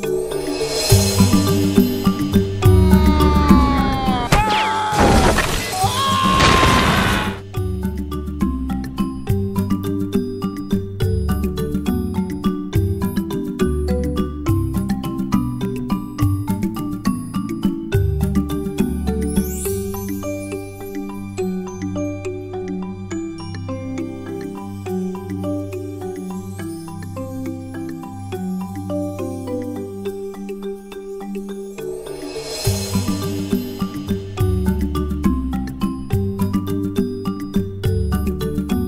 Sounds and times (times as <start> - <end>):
Music: 0.0 - 38.8.